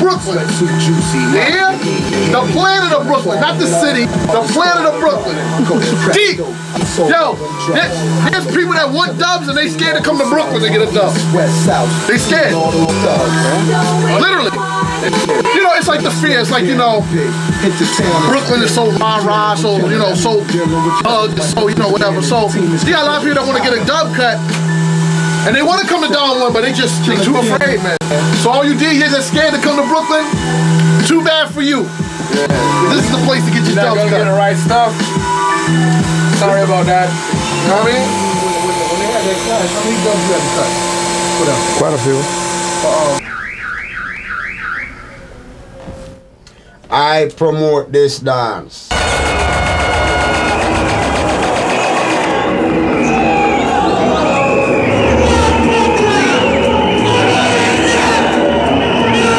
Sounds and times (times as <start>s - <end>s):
Speech: 0.0s - 24.4s, 25.4s - 30.4s, 31.0s - 35.0s, 36.4s - 40.8s, 41.4s - 43.2s, 46.9s - 48.9s.